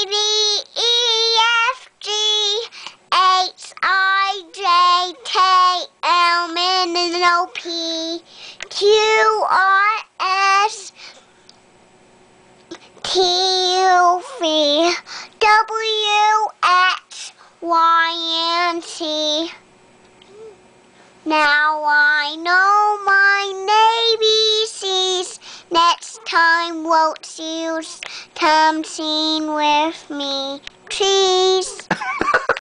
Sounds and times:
Child singing: 0.0 - 11.0, 13.0 - 19.6, 21.3 - 31.9.

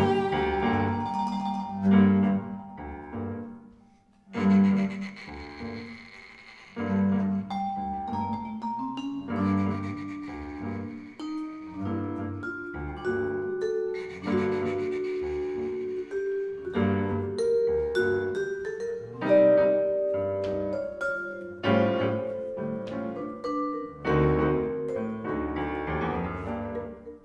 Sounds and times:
Vibraphone: 0.0 - 3.4, 7.2 - 27.2
Double bass: 0.0 - 3.5, 4.3 - 6.0, 6.8 - 27.2
Piano: 0.0 - 27.2.

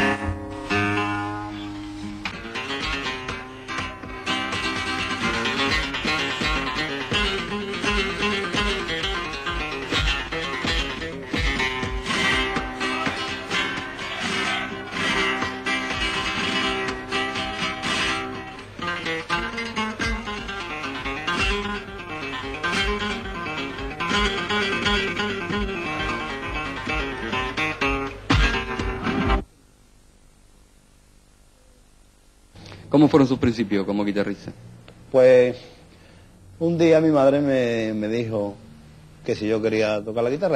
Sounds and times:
Bass guitar: 0.0 - 29.5
Strum: 0.0 - 29.5.

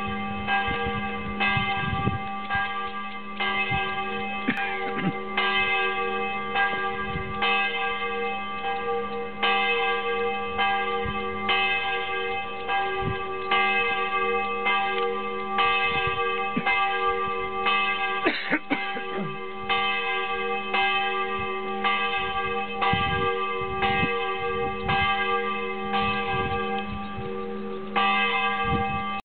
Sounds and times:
Church bell: 0.0 - 29.2.

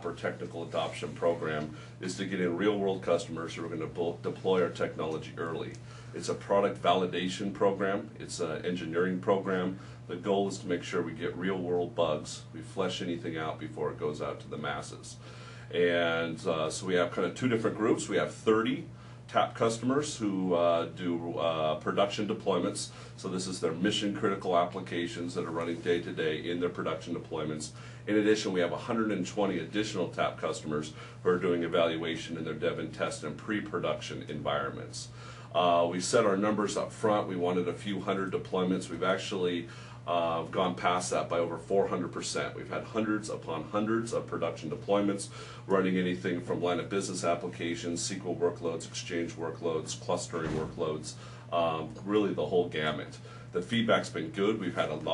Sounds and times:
Speech: 0.0 - 55.1.

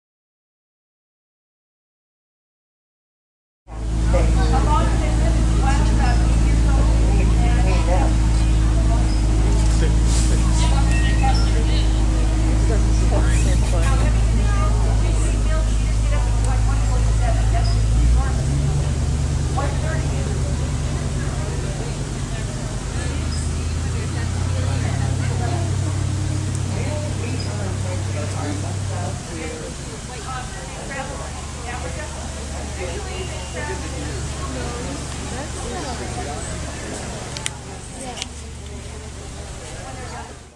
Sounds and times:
Speech: 3.7 - 40.5.

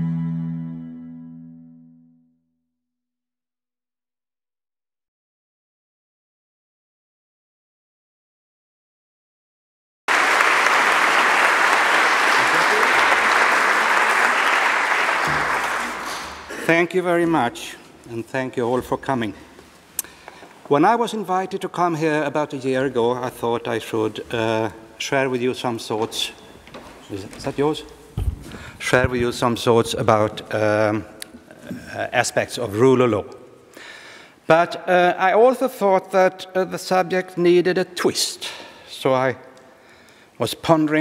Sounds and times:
Male speech, man speaking: 12.4 - 13.0, 16.6 - 19.4, 20.7 - 26.4, 27.0 - 28.0, 28.8 - 33.3, 34.5 - 39.4, 40.4 - 41.0.

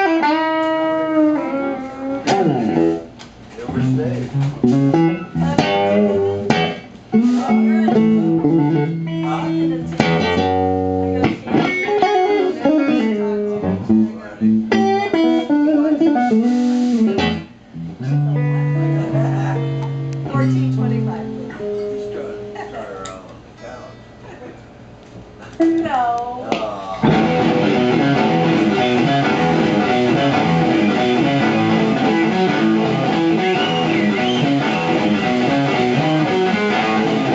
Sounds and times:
Music: 0.0 - 23.1, 27.0 - 37.3
Speech: 3.5 - 4.8, 7.2 - 10.0, 12.2 - 14.6, 20.3 - 24.0.

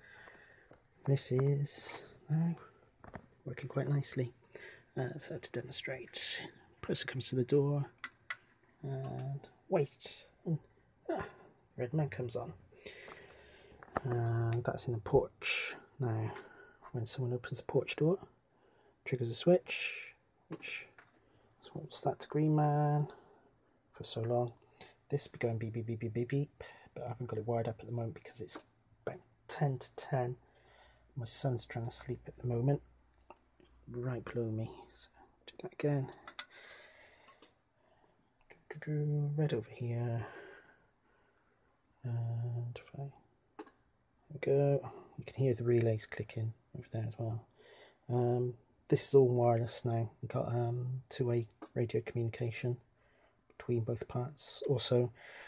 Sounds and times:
Speech: 1.0 - 2.7, 3.4 - 4.4, 5.0 - 8.0, 8.8 - 12.6, 14.0 - 18.3, 19.0 - 21.0, 21.6 - 23.2, 23.9 - 30.4, 31.2 - 32.9, 33.9 - 36.3, 38.5 - 40.4, 42.0 - 43.2, 44.3 - 47.5, 48.1 - 52.8, 53.6 - 55.2.

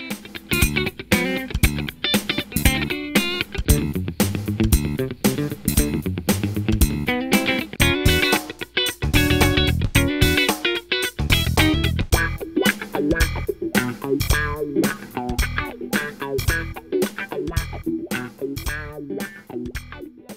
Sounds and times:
Electric guitar: 0.0 - 20.3.

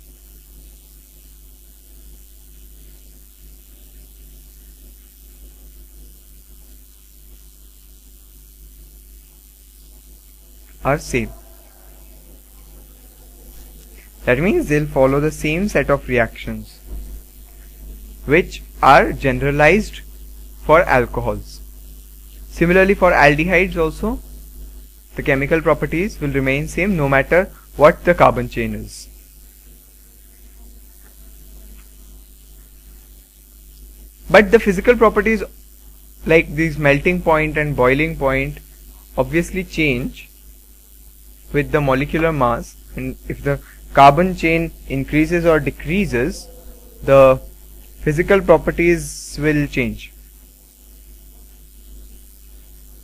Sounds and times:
Inside, small room: 0.0 - 53.0
Speech: 10.8 - 11.6, 14.2 - 16.8, 18.0 - 21.6, 22.5 - 24.2, 25.2 - 29.1, 34.3 - 35.5, 36.2 - 38.6, 39.2 - 40.3, 41.5 - 50.2.

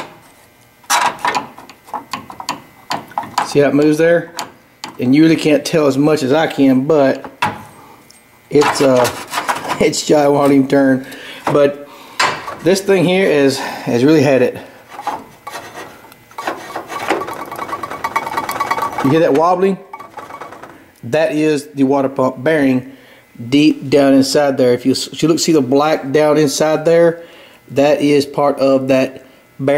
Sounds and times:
Speech: 3.4 - 4.4, 5.0 - 7.3, 8.5 - 11.8, 12.6 - 14.7, 19.0 - 19.9, 21.0 - 29.7.

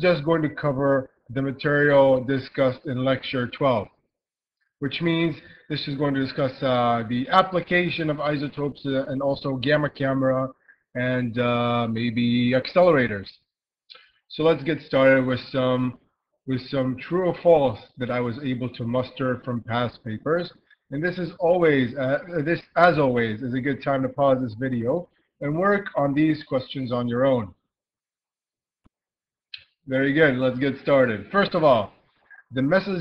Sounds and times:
Speech: 0.0 - 3.9, 4.8 - 13.4, 14.3 - 27.6, 29.9 - 33.0.

